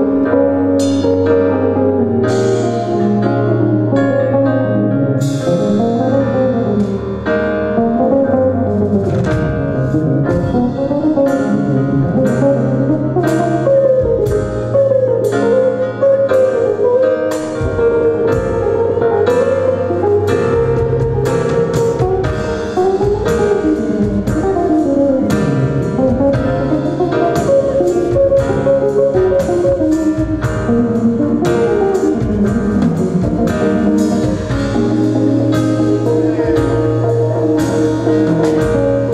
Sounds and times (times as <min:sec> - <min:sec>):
Guitar: 0:00.0 - 0:39.1
Inside, large room or hall: 0:00.0 - 0:39.1.